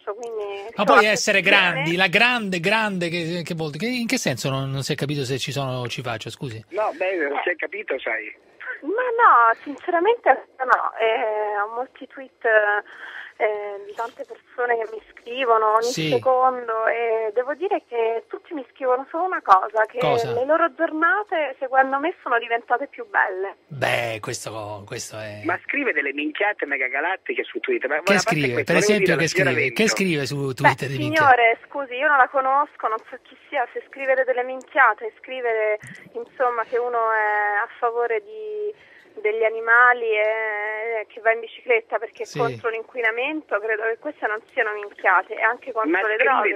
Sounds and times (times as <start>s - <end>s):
Speech: 0.1s - 7.9s, 13.4s - 17.4s, 19.5s - 22.6s, 23.7s - 26.0s, 28.0s - 31.6s, 35.6s - 37.6s, 42.0s - 46.5s.